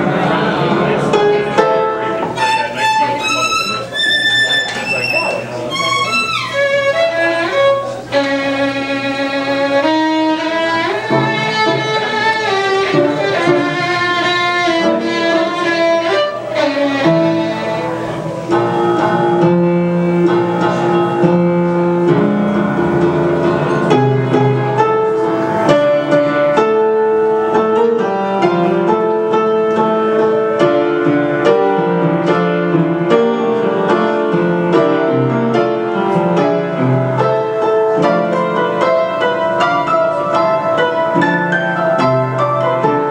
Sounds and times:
Musical instrument: 0:00.0 - 0:43.1.

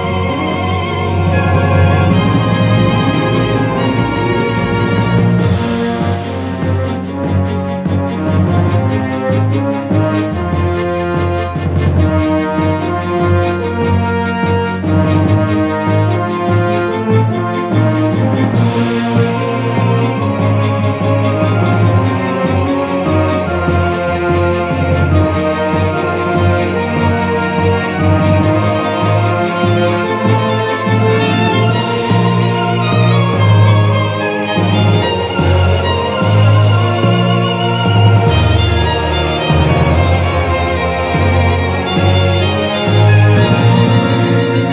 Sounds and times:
Music: 0:00.0 - 0:44.7.

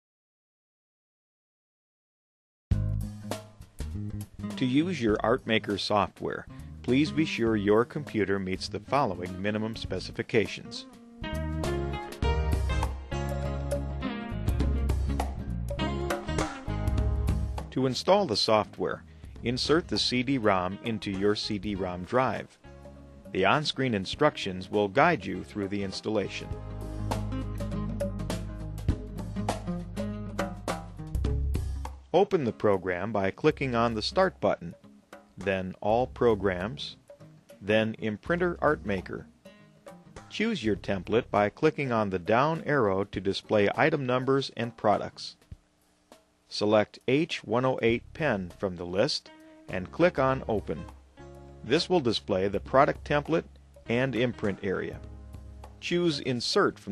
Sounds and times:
Music: 0:02.7 - 0:56.9
Speech: 0:04.6 - 0:10.9, 0:17.8 - 0:22.5, 0:23.4 - 0:26.5, 0:32.2 - 0:34.8, 0:35.4 - 0:37.0, 0:37.6 - 0:39.3, 0:40.3 - 0:45.4, 0:46.5 - 0:50.9, 0:51.7 - 0:55.0, 0:55.8 - 0:56.9.

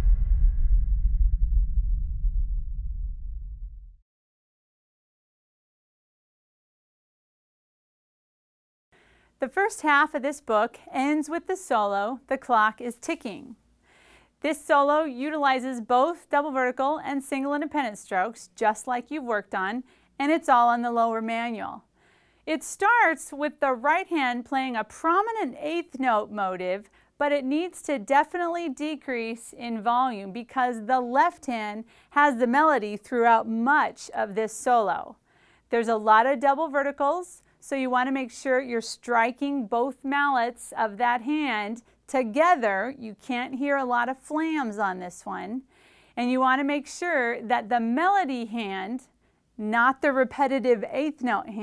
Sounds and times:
Speech: 0:09.4 - 0:13.6, 0:14.4 - 0:21.8, 0:22.5 - 0:45.6, 0:46.2 - 0:51.6.

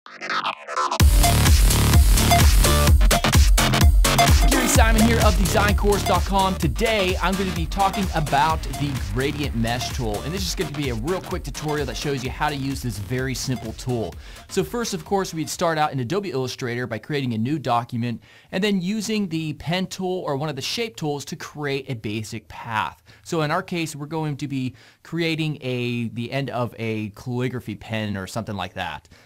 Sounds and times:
Music: 0:00.0 - 0:15.9
Speech: 0:04.5 - 0:29.1.

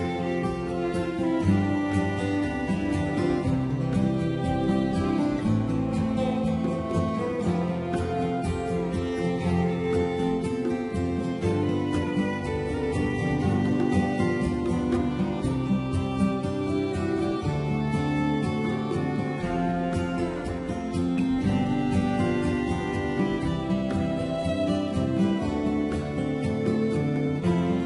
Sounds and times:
Musical instrument: 0:00.0 - 0:27.8.

